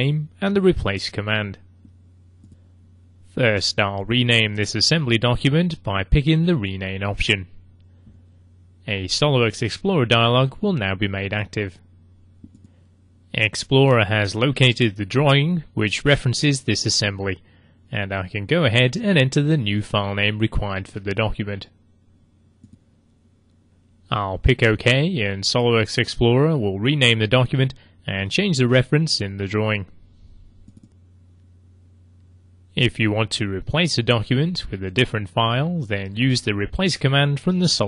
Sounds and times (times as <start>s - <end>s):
Speech: 0.0s - 1.7s, 3.3s - 7.6s, 8.8s - 11.8s, 13.3s - 21.8s, 24.1s - 30.0s, 32.7s - 37.8s.